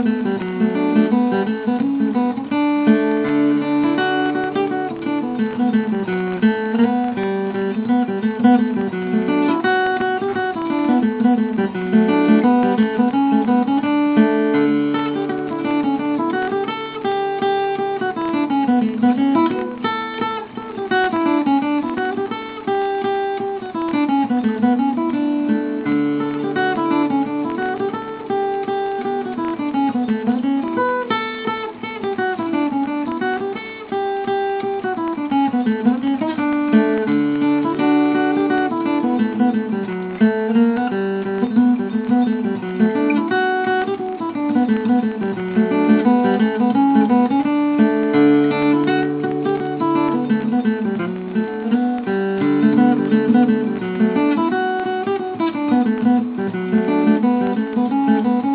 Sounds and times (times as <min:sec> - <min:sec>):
Acoustic guitar: 0:00.0 - 0:58.5.